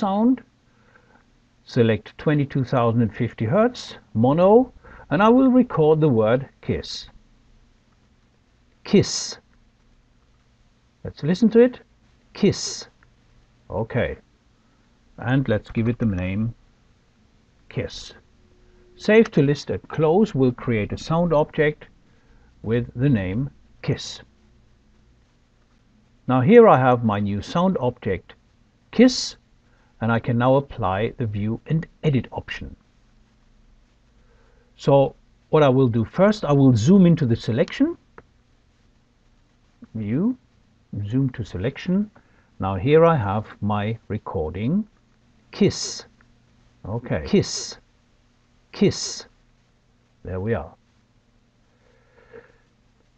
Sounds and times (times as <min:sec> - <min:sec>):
Speech: 0:00.0 - 0:00.5, 0:01.7 - 0:07.2, 0:08.8 - 0:09.5, 0:11.0 - 0:13.0, 0:13.7 - 0:14.2, 0:15.2 - 0:16.6, 0:17.7 - 0:18.2, 0:19.0 - 0:21.9, 0:22.6 - 0:24.3, 0:26.3 - 0:29.4, 0:30.0 - 0:32.8, 0:34.8 - 0:38.0, 0:39.8 - 0:44.9, 0:45.5 - 0:46.2, 0:46.8 - 0:47.9, 0:48.7 - 0:49.4, 0:50.2 - 0:50.8.